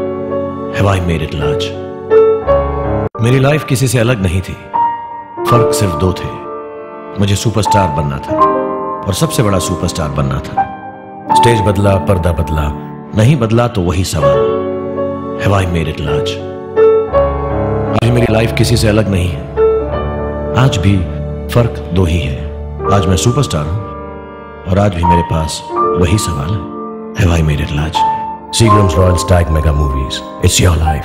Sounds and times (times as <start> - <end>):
Music: 0.0 - 31.0
Speech: 0.7 - 1.8, 3.2 - 4.7, 5.4 - 6.5, 7.2 - 8.4, 9.0 - 10.7, 11.3 - 14.5, 15.4 - 16.5, 17.9 - 19.5, 20.6 - 23.8, 24.7 - 31.0.